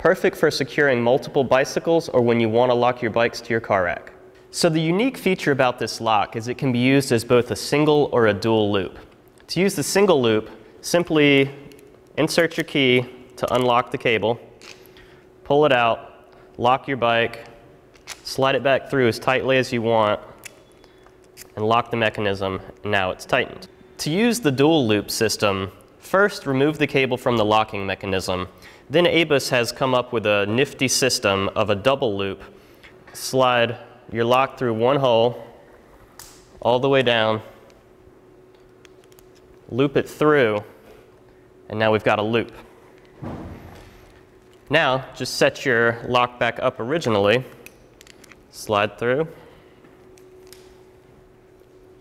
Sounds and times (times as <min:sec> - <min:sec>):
Speech: 0:00.0 - 0:14.4, 0:15.5 - 0:17.6, 0:18.2 - 0:20.3, 0:21.6 - 0:32.5, 0:33.1 - 0:35.6, 0:36.6 - 0:37.6, 0:39.7 - 0:40.8, 0:41.7 - 0:42.7, 0:44.7 - 0:47.6, 0:48.5 - 0:49.4.